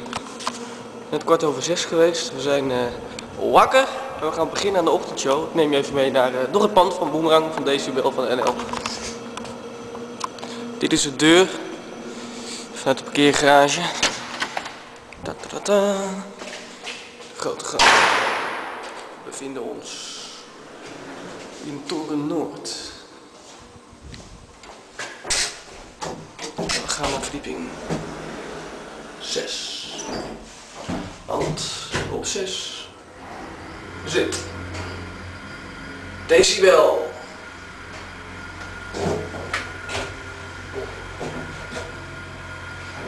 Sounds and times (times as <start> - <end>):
Speech: 1.1 - 9.2, 10.8 - 11.7, 12.8 - 14.1, 15.2 - 16.5, 17.4 - 18.0, 19.2 - 20.4, 21.6 - 23.1, 26.5 - 27.9, 29.2 - 30.2, 31.3 - 33.0, 34.0 - 34.5, 36.3 - 37.3.